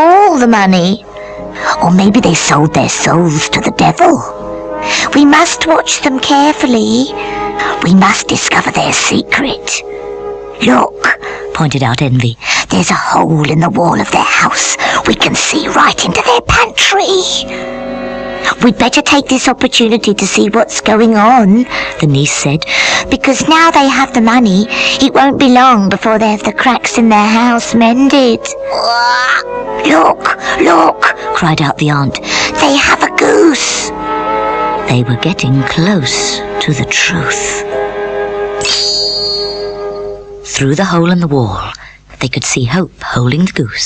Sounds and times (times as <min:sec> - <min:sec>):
Speech: 0:00.0 - 0:01.0, 0:01.6 - 0:04.3, 0:05.0 - 0:09.8, 0:10.6 - 0:17.5, 0:18.5 - 0:33.9, 0:34.9 - 0:37.6, 0:40.5 - 0:43.8
Music: 0:00.0 - 0:43.8.